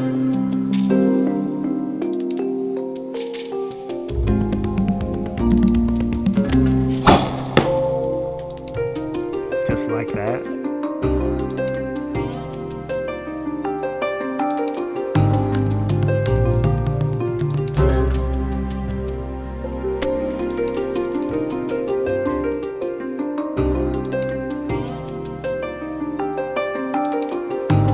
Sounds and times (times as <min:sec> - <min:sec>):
Music: 0:00.0 - 0:27.9.